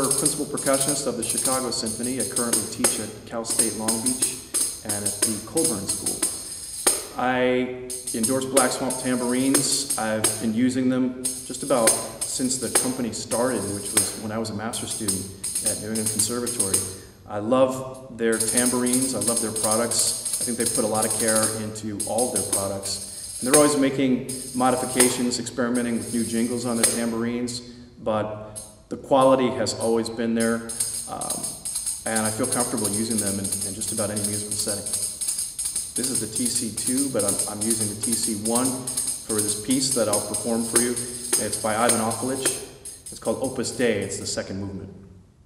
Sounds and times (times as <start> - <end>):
Speech: 0.0 - 6.3, 7.1 - 35.0, 36.0 - 45.0
Tambourine: 0.0 - 7.2, 7.9 - 17.2, 18.3 - 27.2, 28.6 - 28.8, 30.4 - 44.0.